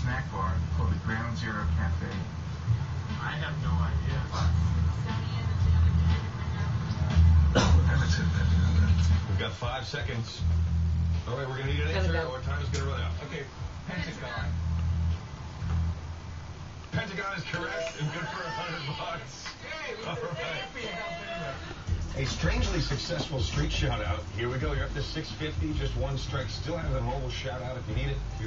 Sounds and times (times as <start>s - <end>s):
Speech: 0.0s - 2.3s, 22.2s - 28.4s.